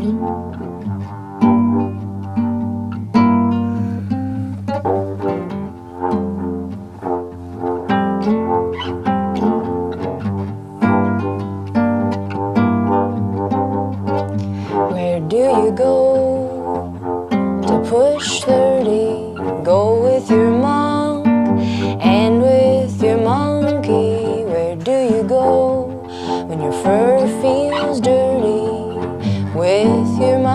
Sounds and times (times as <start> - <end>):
Music: 0.0 - 30.5.